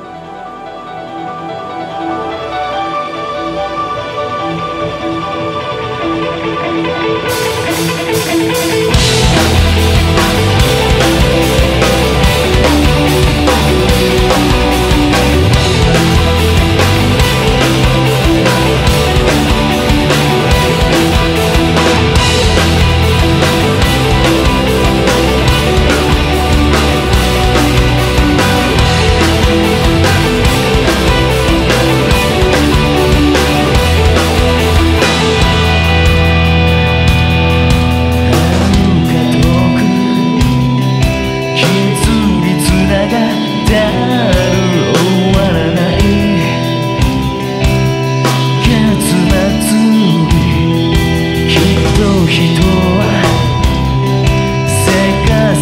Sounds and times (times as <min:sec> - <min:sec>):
Music: 0:00.0 - 0:55.6.